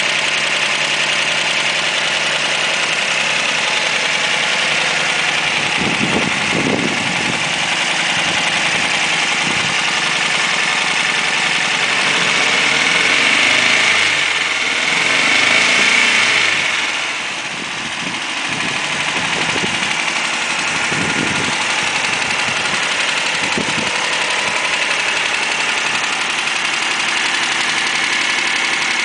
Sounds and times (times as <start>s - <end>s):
Medium engine (mid frequency): 0.0s - 29.0s
Vehicle: 0.0s - 29.0s.